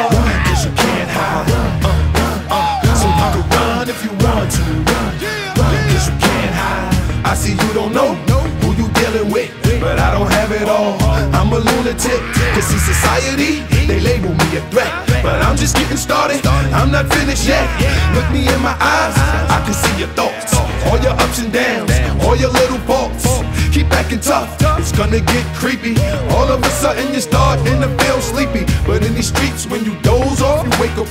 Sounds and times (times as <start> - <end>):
Music: 0.0 - 31.1.